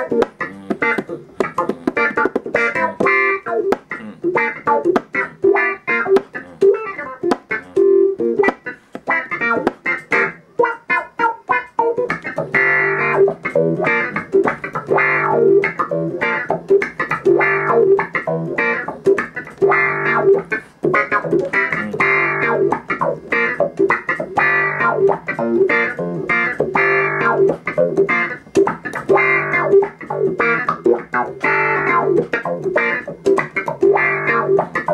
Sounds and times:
Music: 0.0s - 34.9s.

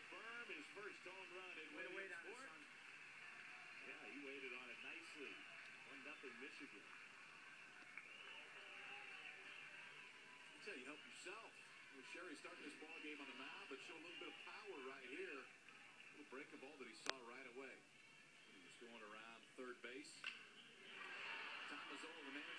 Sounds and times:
Speech: 0.1s - 2.6s, 3.8s - 6.8s, 10.6s - 15.5s, 16.1s - 17.8s, 18.5s - 20.3s, 21.5s - 22.5s.

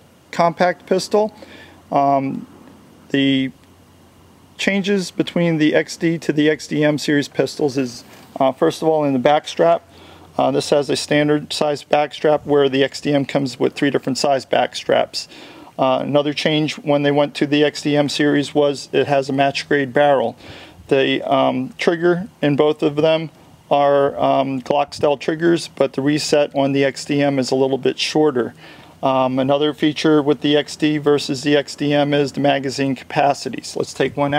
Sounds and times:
Speech: 0.3s - 2.5s, 3.1s - 3.6s, 4.6s - 34.3s.

